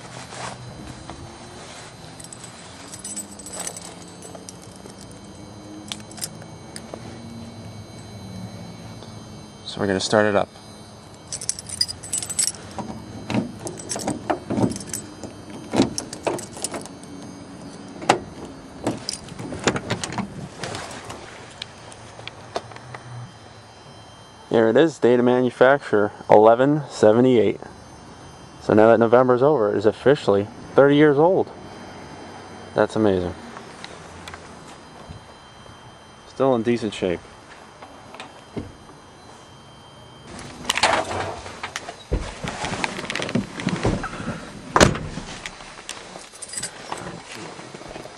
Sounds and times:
Speech: 9.7 - 10.5, 24.5 - 27.7, 28.6 - 31.5, 32.8 - 33.4, 36.3 - 37.2.

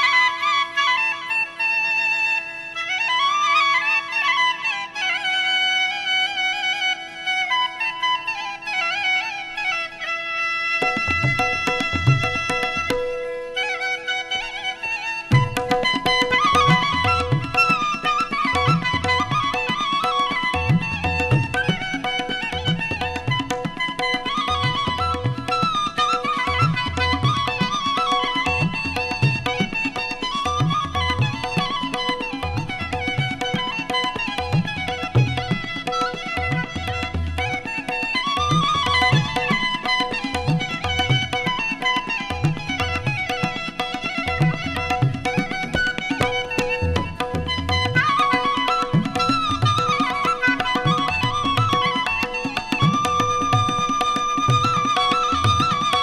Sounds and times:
Music: 0.0 - 56.0.

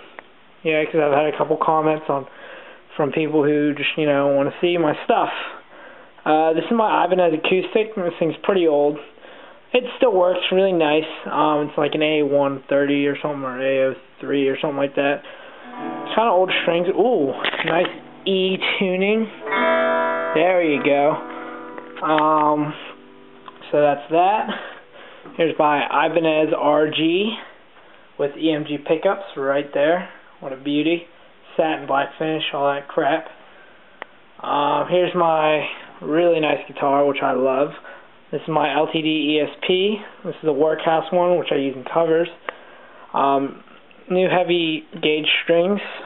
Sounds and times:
Speech: 0.6 - 2.3, 2.9 - 15.3, 16.1 - 19.4, 20.4 - 21.2, 22.0 - 23.0, 23.6 - 27.6, 28.2 - 33.4, 34.4 - 42.4, 43.1 - 46.0
Acoustic guitar: 15.3 - 26.2
Strum: 15.6 - 26.6.

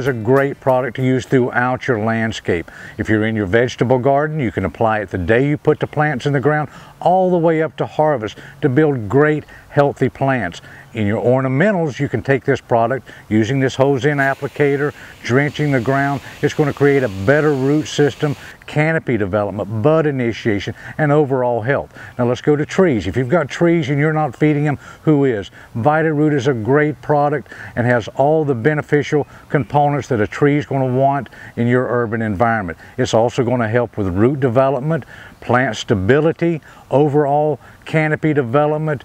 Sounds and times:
Speech: 0.0 - 39.0
Spray: 14.1 - 18.6.

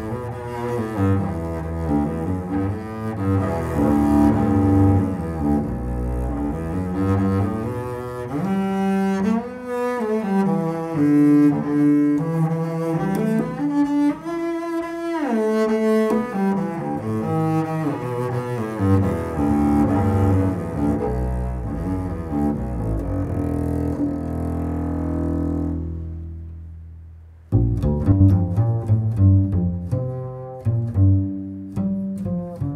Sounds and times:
Double bass: 0.0 - 32.7.

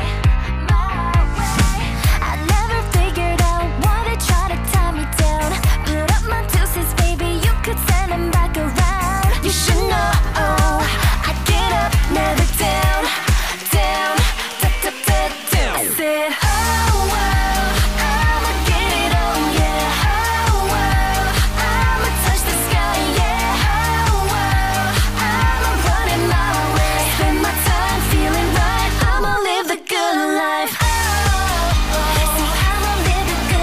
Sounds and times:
Pop music: 0.0 - 33.6.

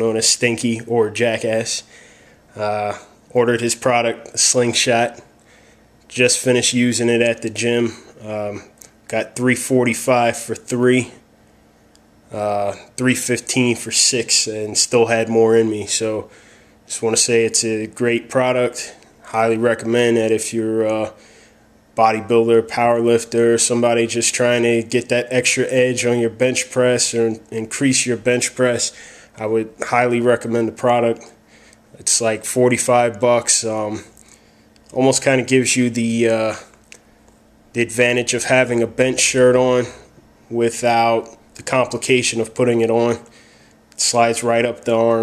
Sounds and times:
Speech: 0.0 - 1.9, 2.5 - 5.3, 6.1 - 11.3, 12.3 - 16.3, 16.9 - 21.2, 22.0 - 31.4, 32.0 - 34.2, 34.9 - 36.8, 37.8 - 43.4, 44.0 - 45.2.

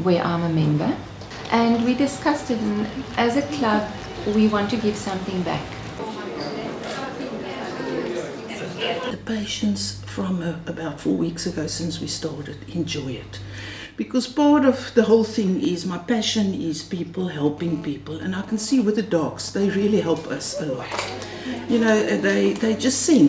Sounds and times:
Speech: 0.0 - 23.2.

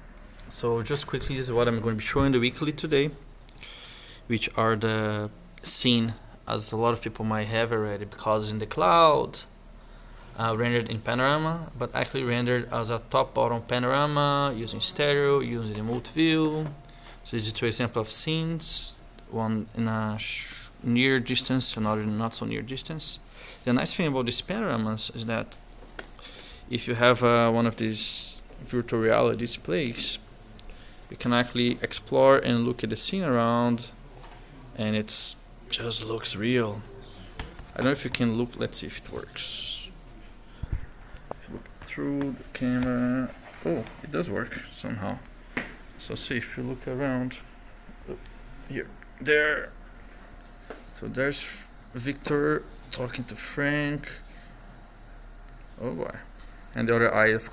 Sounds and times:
Speech: 0.5 - 3.2, 4.3 - 9.5, 10.4 - 25.6, 26.7 - 30.3, 31.1 - 34.0, 34.7 - 40.0, 41.4 - 45.3, 46.0 - 47.5, 51.0 - 54.2, 55.8 - 57.5.

